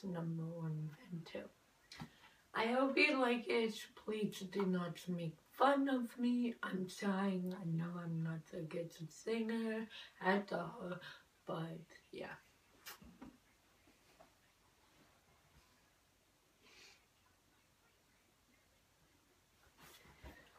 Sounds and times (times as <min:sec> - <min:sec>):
Speech: 0:00.0 - 0:01.6, 0:02.6 - 0:12.4.